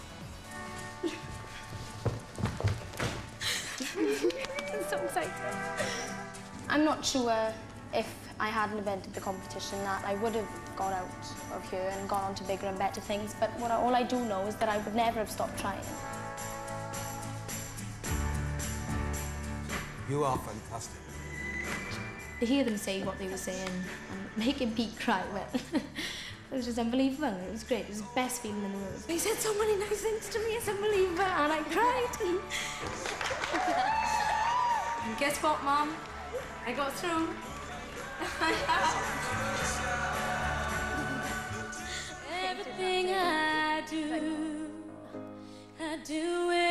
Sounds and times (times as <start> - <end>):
Music: 0.0 - 46.7.